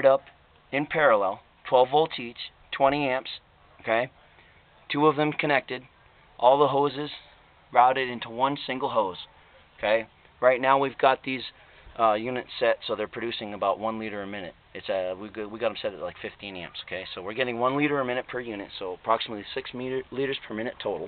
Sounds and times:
Speech: 0.0 - 4.2, 4.9 - 21.0.

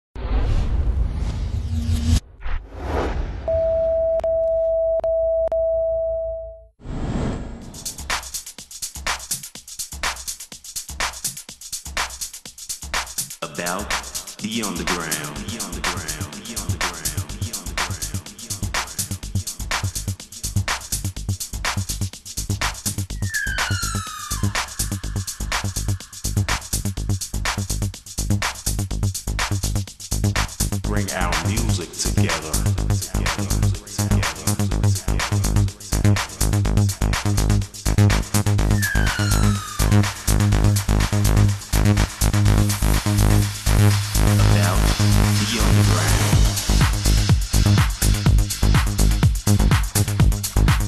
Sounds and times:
Sine wave: 3.5 - 6.7.

